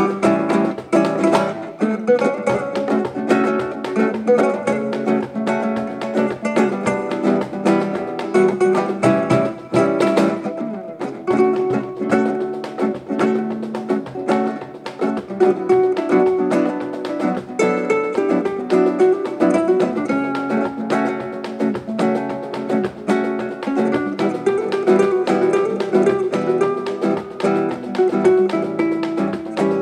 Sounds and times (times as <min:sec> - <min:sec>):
Music: 0:00.0 - 0:29.8.